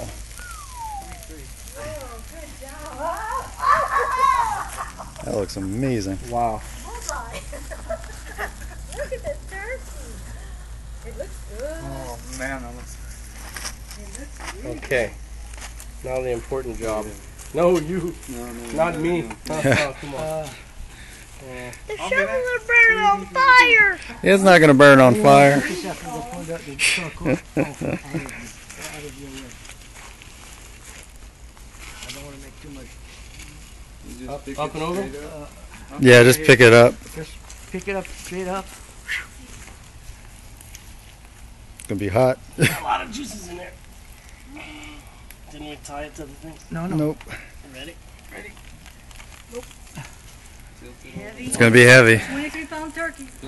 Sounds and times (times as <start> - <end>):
Outside, rural or natural: 0.0 - 53.4.